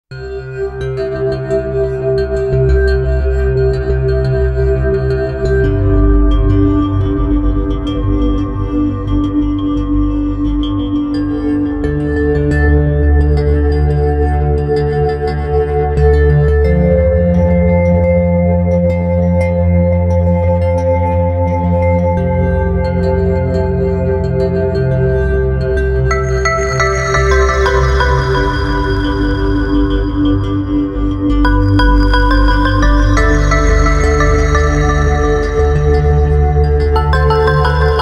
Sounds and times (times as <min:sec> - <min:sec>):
Ambient music: 0:00.1 - 0:38.0.